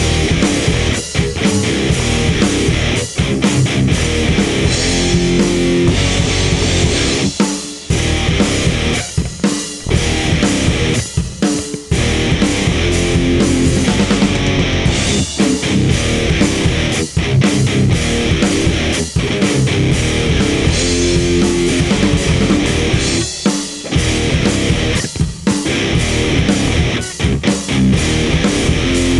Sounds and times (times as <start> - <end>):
Music: 0.0 - 29.1.